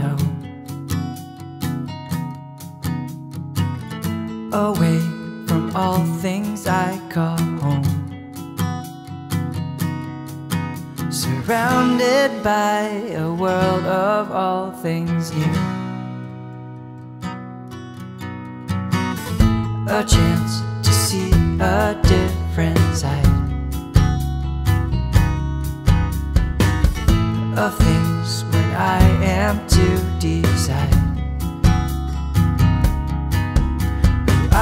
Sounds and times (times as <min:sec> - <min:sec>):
Music: 0:00.0 - 0:34.6.